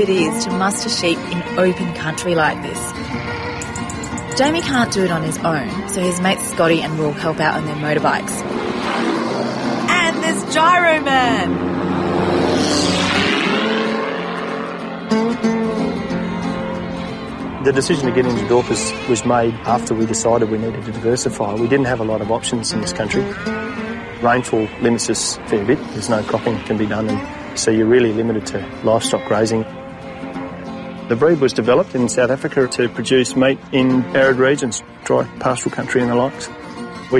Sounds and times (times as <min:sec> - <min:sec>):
Music: 0:00.0 - 0:12.2, 0:12.8 - 0:37.1
Speech: 0:24.2 - 0:29.6.